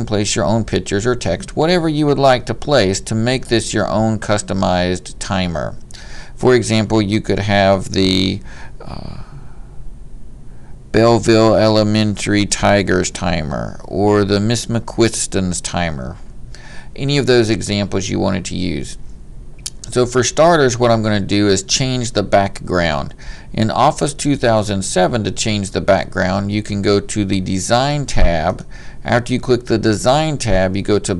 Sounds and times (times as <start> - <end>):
Speech: 0.0 - 5.8, 6.4 - 9.3, 10.9 - 16.2, 17.0 - 19.0, 19.7 - 31.1.